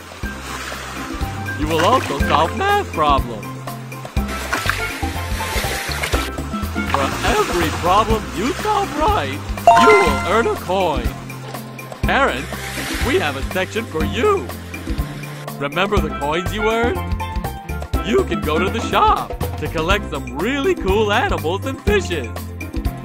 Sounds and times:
Music: 0.0 - 23.0
Water: 0.0 - 23.0
Speech: 1.6 - 3.5, 7.0 - 11.0, 12.1 - 14.5, 15.6 - 17.0, 18.0 - 22.3.

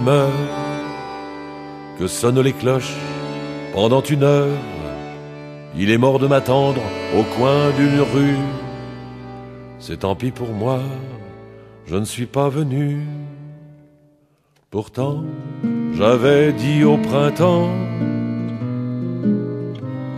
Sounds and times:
Music: 0.0 - 20.1.

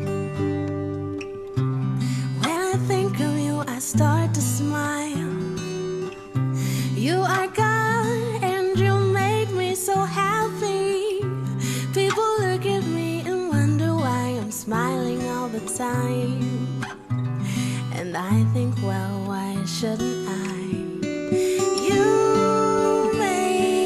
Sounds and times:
Guitar: 0.0 - 23.8.

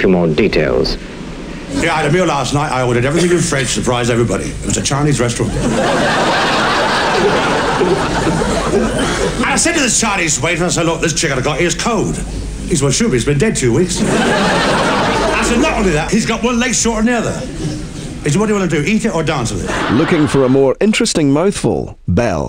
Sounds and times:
Speech: 1.8 - 5.6, 9.4 - 14.0, 15.3 - 17.6, 18.2 - 22.4.

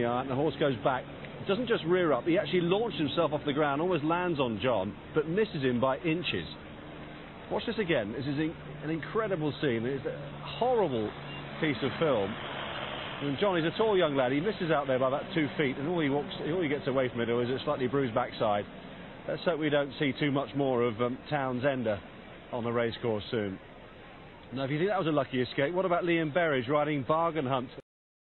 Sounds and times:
Speech: 0.0 - 6.6, 7.5 - 12.4, 13.2 - 18.7, 19.3 - 23.6, 24.5 - 27.8.

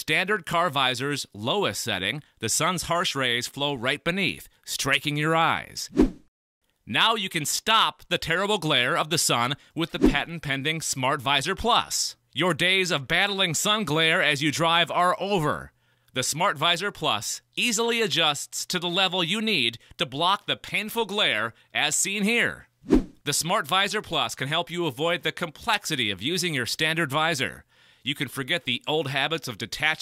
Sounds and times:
Speech: 0.0 - 5.9, 6.9 - 22.7, 23.3 - 30.0.

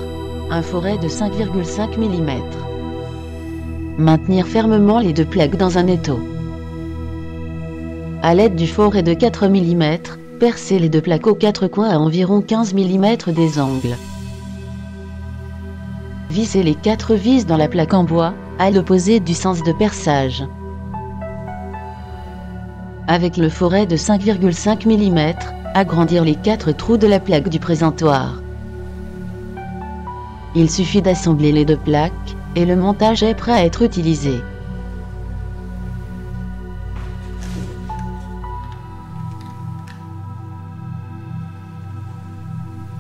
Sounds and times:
Music: 0.0 - 43.0
Speech: 0.5 - 2.6, 4.0 - 6.3, 8.2 - 14.0, 16.3 - 20.5, 23.1 - 28.4, 30.6 - 34.5.

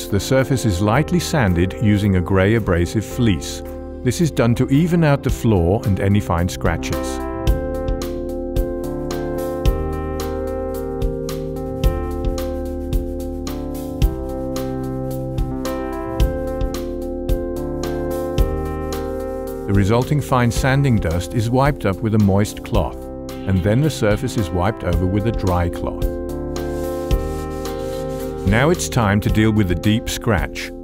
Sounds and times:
Speech: 0.0 - 7.2, 19.7 - 26.1, 28.4 - 30.8
Music: 0.0 - 30.8.

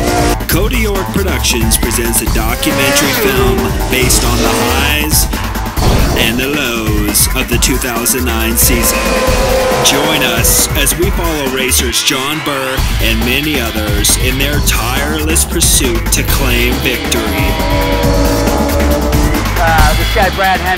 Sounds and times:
Music: 0.0 - 20.7
Speech: 0.5 - 5.3, 6.2 - 9.0, 9.8 - 17.6, 19.6 - 20.7.

